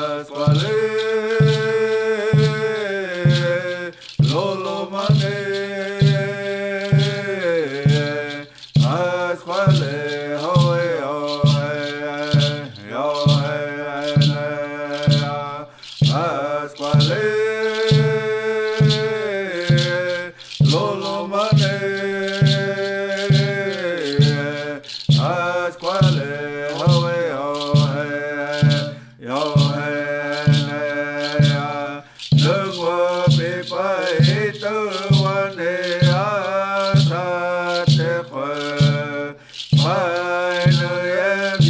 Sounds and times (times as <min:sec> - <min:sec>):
Mantra: 0:00.0 - 0:41.7.